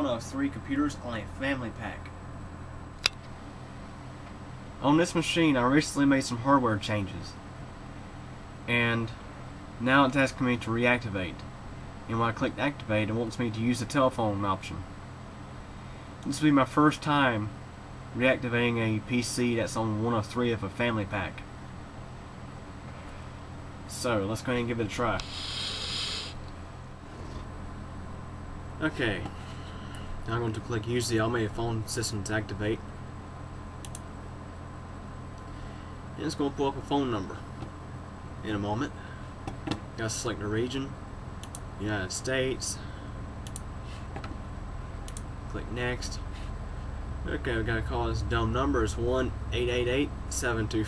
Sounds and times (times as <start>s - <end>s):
Speech: 0.0s - 2.1s, 4.8s - 7.4s, 8.7s - 9.2s, 9.8s - 11.4s, 12.1s - 14.9s, 16.2s - 17.6s, 18.2s - 21.4s, 23.9s - 25.2s, 28.8s - 29.3s, 30.3s - 32.8s, 36.2s - 37.5s, 38.4s - 39.0s, 40.0s - 41.0s, 41.8s - 42.8s, 45.5s - 46.3s, 47.2s - 50.8s.